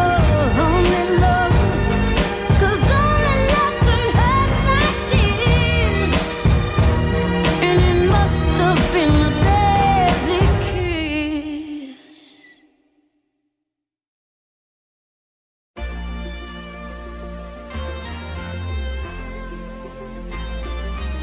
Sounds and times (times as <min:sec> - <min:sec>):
Pop music: 0:00.0 - 0:12.5.